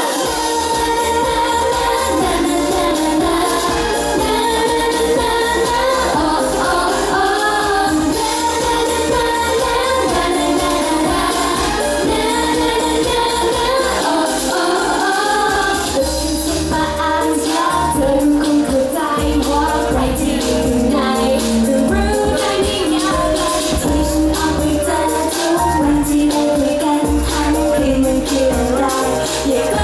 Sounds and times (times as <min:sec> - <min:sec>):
Happy music: 0:00.0 - 0:29.8.